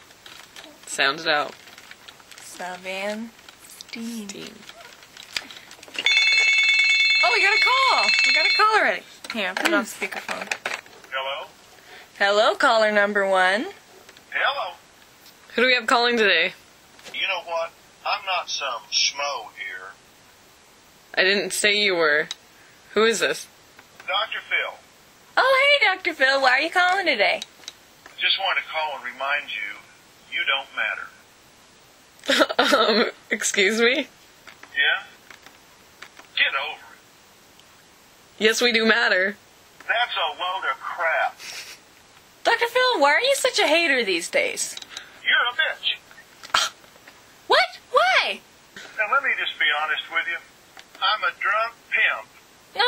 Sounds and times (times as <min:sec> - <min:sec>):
Speech: 0:02.4 - 0:04.7.